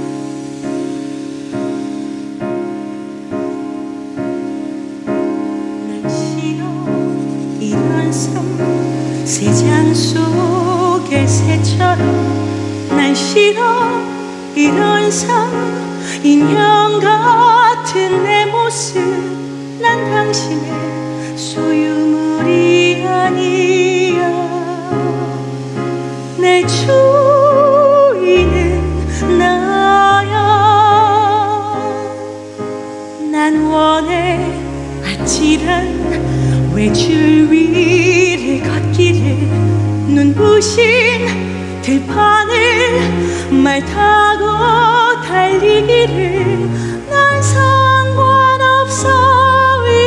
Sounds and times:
Opera: 0:00.0 - 0:50.0.

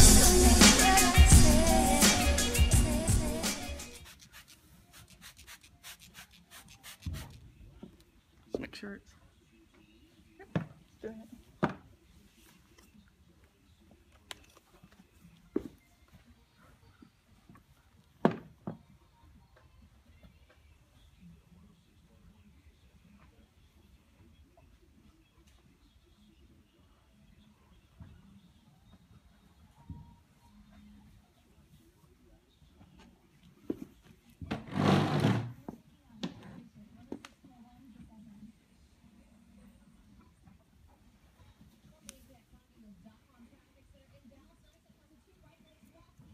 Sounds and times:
Speech: 0:07.6 - 0:14.9, 0:35.7 - 0:46.3.

